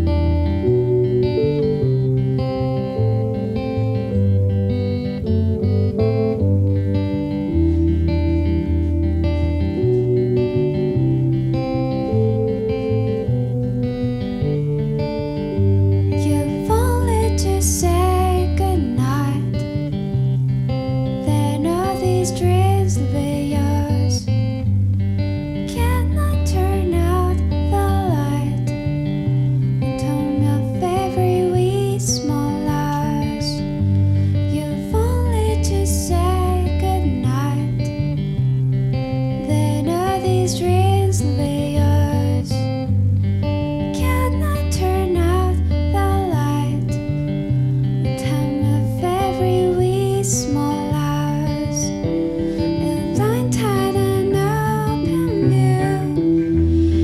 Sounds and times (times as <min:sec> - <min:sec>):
Music: 0:00.0 - 0:57.0.